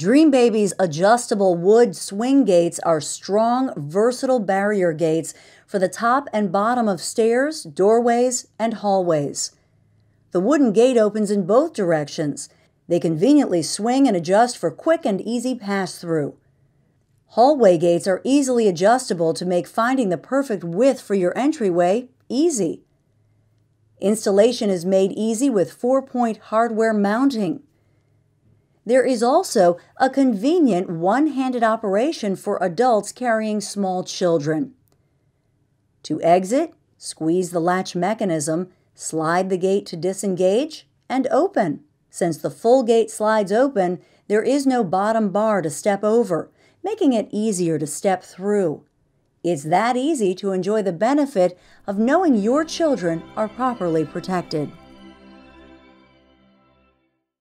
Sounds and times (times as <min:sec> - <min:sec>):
Speech: 0:00.0 - 0:09.6, 0:10.4 - 0:16.4, 0:17.3 - 0:22.8, 0:24.0 - 0:27.6, 0:28.9 - 0:34.8, 0:36.1 - 0:48.9, 0:49.5 - 0:54.8.